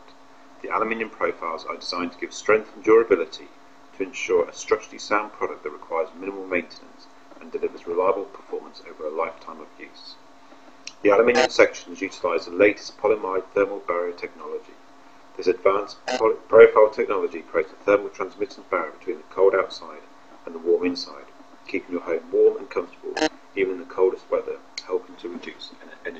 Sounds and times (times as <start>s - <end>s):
Speech: 0.6s - 10.2s, 10.9s - 14.8s, 15.4s - 26.1s.